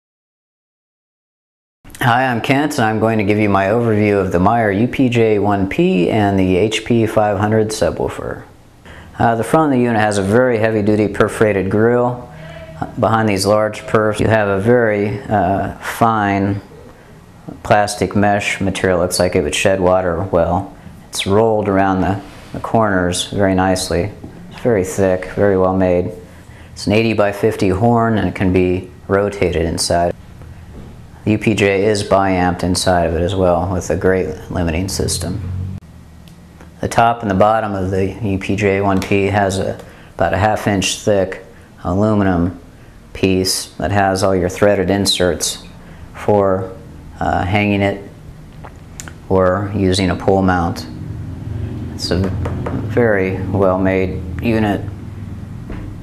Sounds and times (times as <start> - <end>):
Speech: 2.0 - 8.5, 9.2 - 16.8, 17.5 - 26.2, 26.8 - 30.2, 31.2 - 35.4, 36.8 - 48.2, 49.0 - 51.0, 52.0 - 54.9.